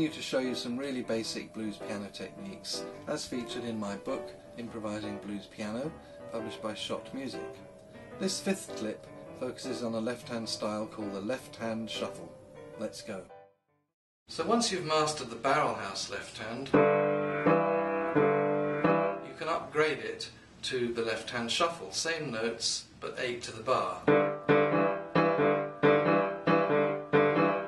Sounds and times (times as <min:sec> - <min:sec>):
Speech: 0:00.0 - 0:07.6, 0:08.2 - 0:13.4, 0:14.3 - 0:16.8, 0:19.3 - 0:24.1
Music: 0:00.0 - 0:13.9, 0:16.7 - 0:19.5, 0:24.1 - 0:27.6.